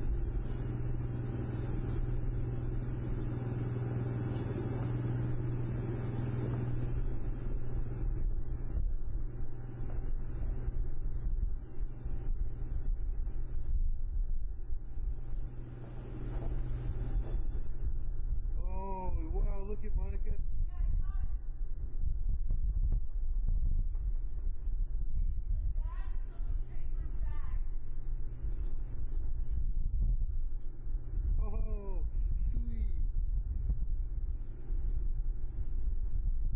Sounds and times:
Wind noise (microphone): 7.5s - 9.6s, 10.3s - 15.4s, 17.2s - 36.5s
Speech: 18.6s - 21.4s, 25.7s - 27.7s, 31.4s - 33.0s.

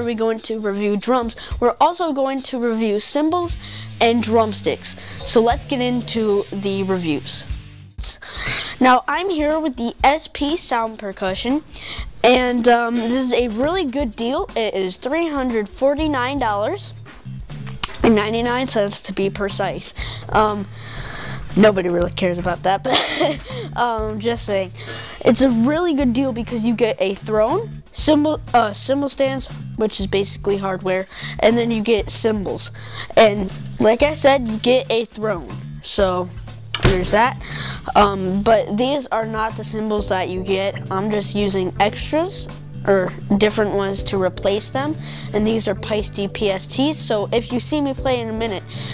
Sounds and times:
Speech: 0.0s - 17.0s, 18.0s - 20.7s, 21.5s - 48.7s
Music: 0.0s - 48.9s.

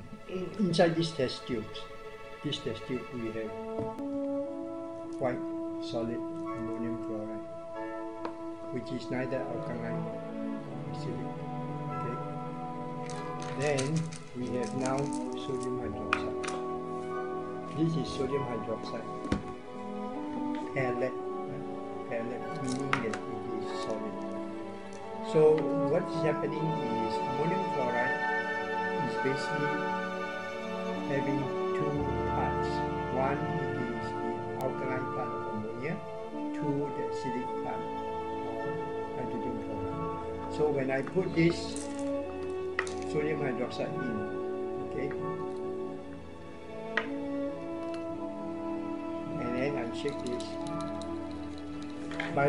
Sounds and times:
Music: 0.0s - 52.4s
Speech: 0.3s - 1.9s, 2.5s - 3.5s, 5.2s - 7.4s, 8.8s - 10.0s, 13.6s - 16.4s, 17.8s - 19.3s, 20.7s - 24.2s, 25.3s - 28.2s, 29.0s - 29.8s, 31.1s - 36.0s, 36.6s - 37.8s, 38.4s - 39.7s, 40.5s - 41.8s, 43.1s - 45.2s, 49.4s - 50.6s, 52.3s - 52.4s.

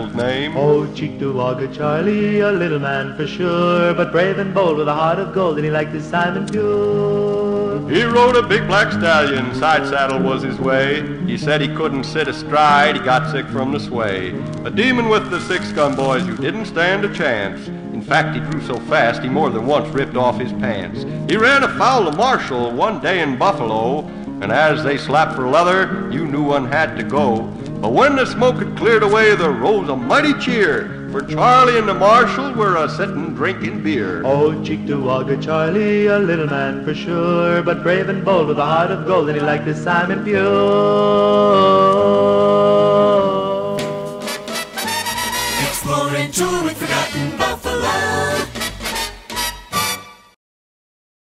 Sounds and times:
Jingle (music): 43.8s - 50.4s.

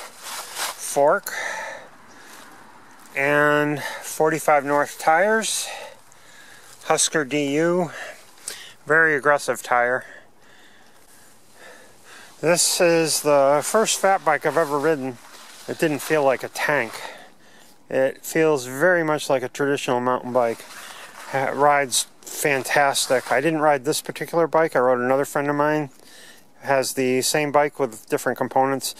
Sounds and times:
Speech: 0.8s - 1.5s, 3.2s - 5.9s, 6.8s - 8.1s, 8.9s - 10.2s, 12.4s - 17.2s, 17.9s - 20.7s, 21.3s - 25.9s, 26.6s - 28.9s.

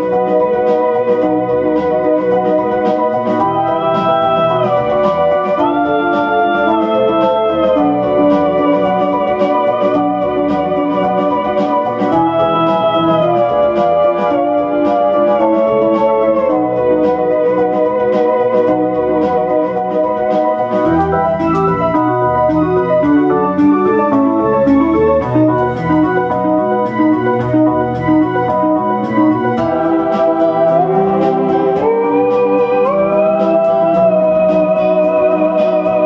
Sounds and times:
Organ: 0.0s - 36.0s.

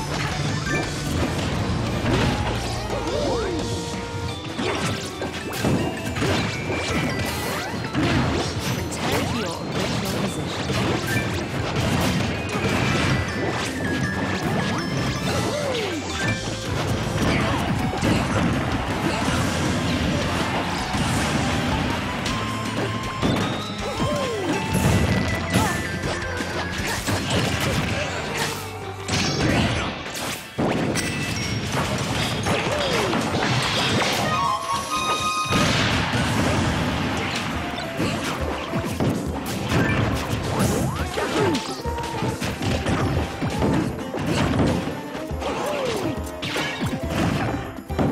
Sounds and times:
Smash, crash: 0.0s - 3.6s, 4.5s - 48.1s.

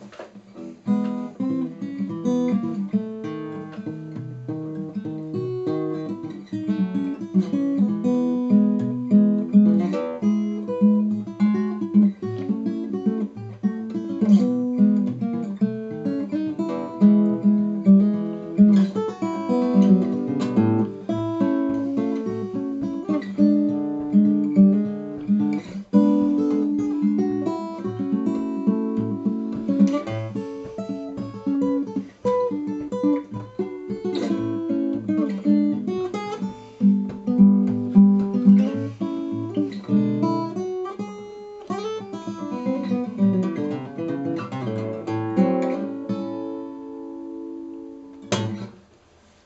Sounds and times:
Acoustic guitar: 0.0s - 49.4s
Strum: 0.0s - 49.4s.

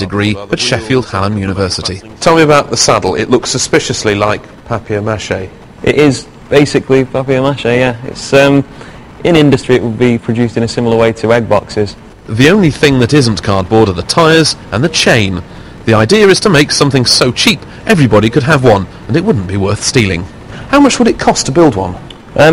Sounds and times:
Speech: 0.0s - 22.5s.

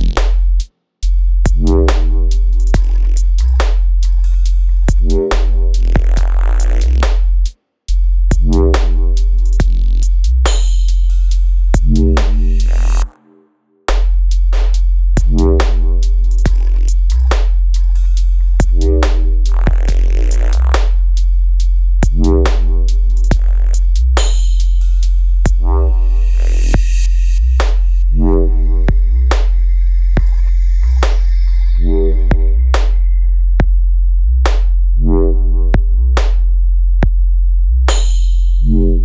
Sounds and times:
Dubstep: 0.0s - 0.4s, 1.5s - 7.4s, 8.3s - 13.2s, 13.9s - 21.3s, 22.0s - 33.2s.

